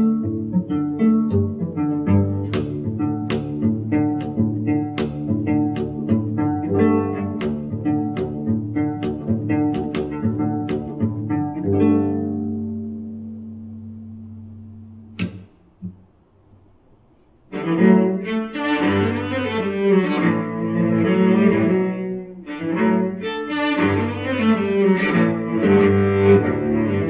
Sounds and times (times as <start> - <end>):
Pizzicato: 0.0 - 27.1.